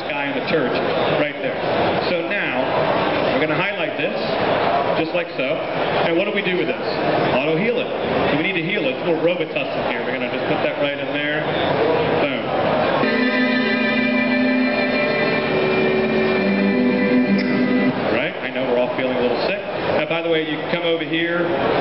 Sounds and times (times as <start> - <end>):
Speech: 0.0 - 2.7, 3.3 - 4.4, 5.0 - 11.5, 12.2 - 12.6, 18.1 - 21.6.